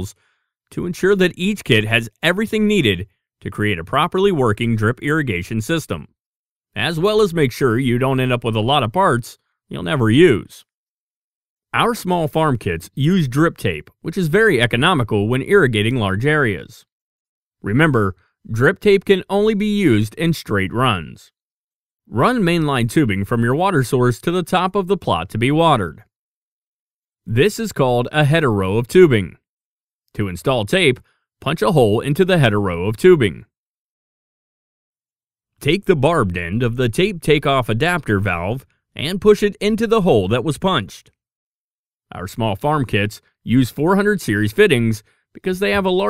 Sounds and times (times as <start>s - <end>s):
Speech: 0.0s - 6.2s, 6.8s - 10.7s, 11.7s - 16.9s, 17.6s - 21.4s, 22.1s - 26.1s, 27.3s - 29.4s, 30.1s - 33.6s, 35.6s - 41.2s, 42.1s - 46.0s.